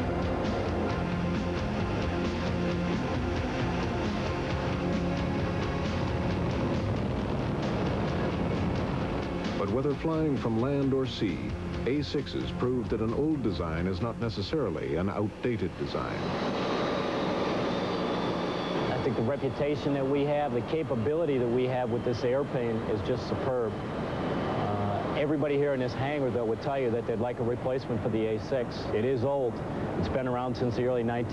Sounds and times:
Fixed-wing aircraft, airplane: 0.0 - 31.3.

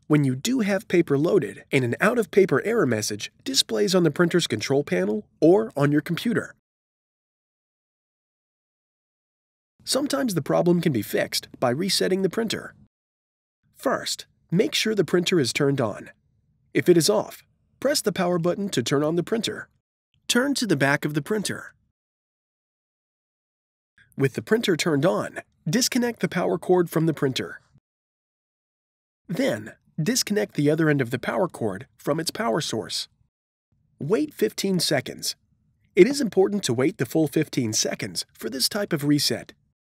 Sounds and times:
Speech: 0.0 - 6.6, 9.9 - 12.8, 13.8 - 16.2, 16.8 - 21.8, 24.2 - 27.7, 29.3 - 33.2, 34.0 - 35.4, 36.0 - 39.6.

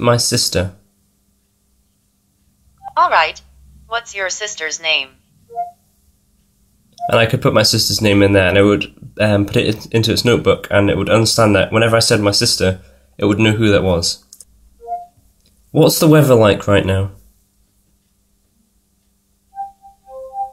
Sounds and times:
Speech: 0.0 - 0.8, 2.9 - 5.2, 7.1 - 14.3, 15.7 - 17.2
Inside, small room: 0.0 - 20.5.

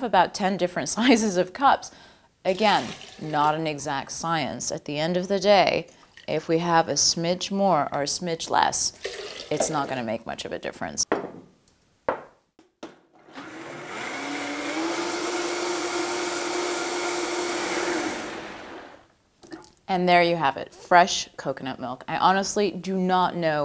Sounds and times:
Blender: 13.2 - 19.1.

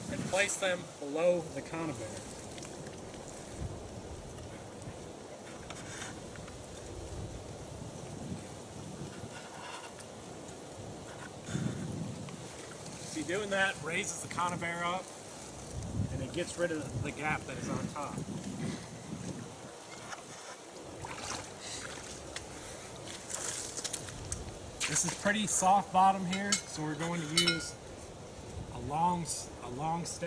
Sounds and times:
Outside, rural or natural: 0.0 - 30.2
Speech: 0.1 - 2.2, 13.1 - 15.1, 16.1 - 18.2, 24.8 - 27.8, 28.7 - 30.2.

